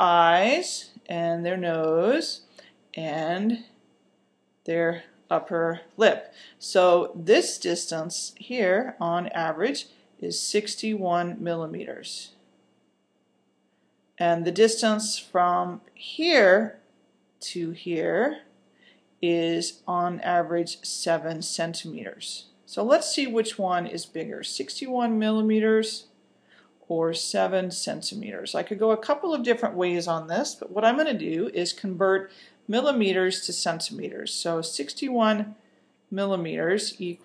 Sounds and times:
Speech: 0:00.0 - 0:03.8, 0:04.7 - 0:12.4, 0:14.2 - 0:16.8, 0:17.4 - 0:18.5, 0:19.2 - 0:26.1, 0:26.9 - 0:35.6, 0:36.2 - 0:37.2.

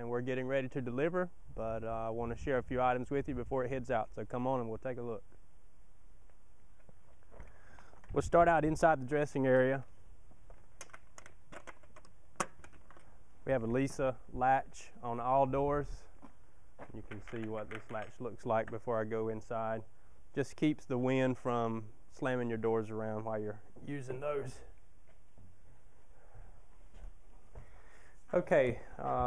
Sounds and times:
Speech: 0:00.0 - 0:05.2, 0:08.1 - 0:09.9, 0:13.5 - 0:16.1, 0:16.9 - 0:19.8, 0:20.4 - 0:24.7, 0:28.3 - 0:29.2.

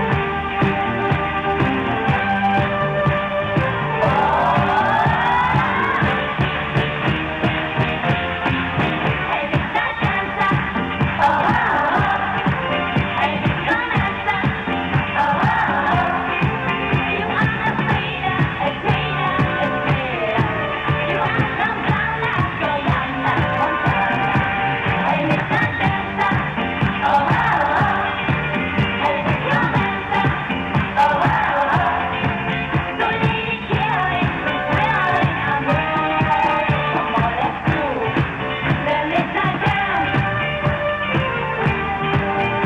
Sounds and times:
Inside, large room or hall: 0:00.0 - 0:42.6
Music: 0:00.0 - 0:42.6
Singing: 0:03.9 - 0:06.2, 0:09.2 - 0:40.8.

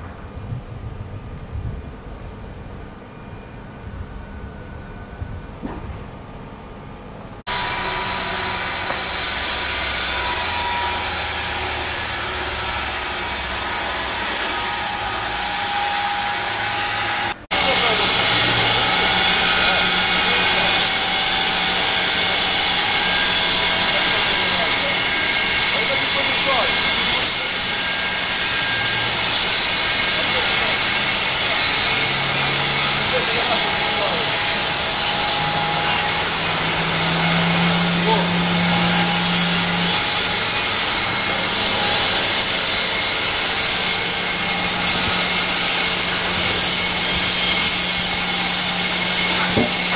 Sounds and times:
Speech: 0:17.6 - 0:20.7, 0:25.7 - 0:26.8, 0:33.1 - 0:34.3, 0:38.0 - 0:38.4.

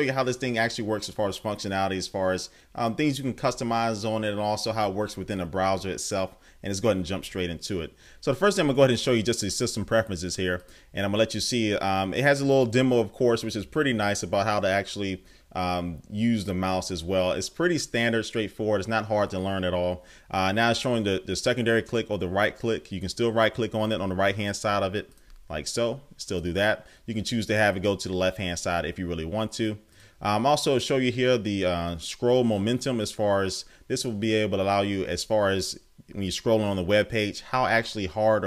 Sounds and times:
Speech: 0:00.0 - 0:38.4.

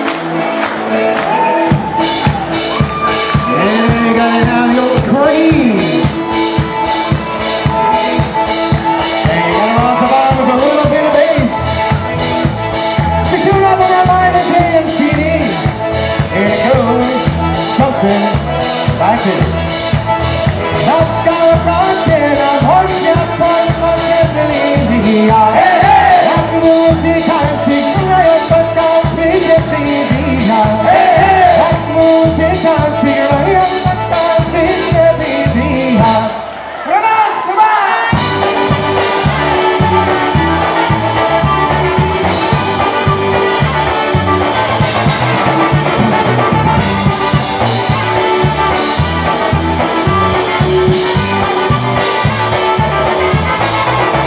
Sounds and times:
Rhythm and blues: 0:00.0 - 0:36.6, 0:38.0 - 0:54.2.

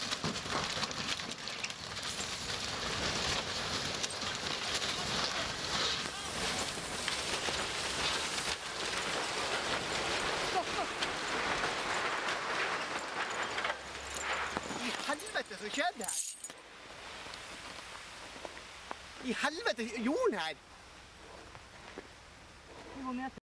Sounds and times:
Speech: 0:19.2 - 0:20.6, 0:23.0 - 0:23.4.

